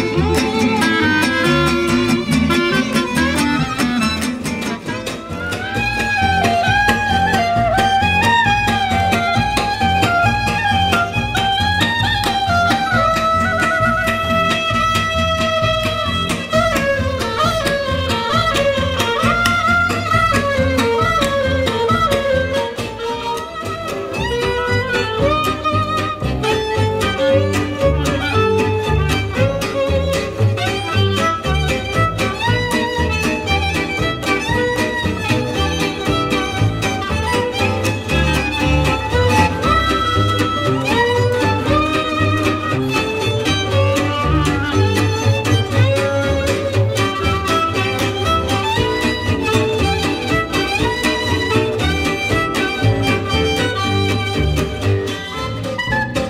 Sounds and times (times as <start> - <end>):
Double bass: 0.0 - 56.2
Guitar: 0.0 - 56.2
Traditional music: 0.0 - 56.2
Violin, fiddle: 0.0 - 56.2.